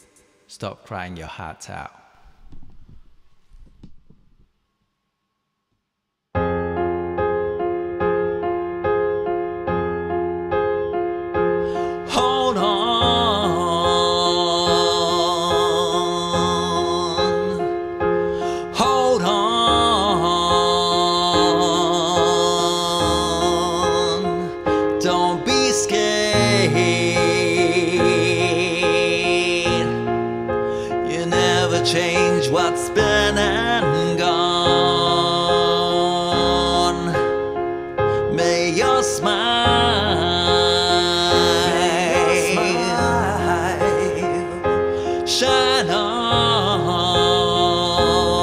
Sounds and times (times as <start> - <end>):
Music: 0.0 - 0.8, 6.4 - 48.4.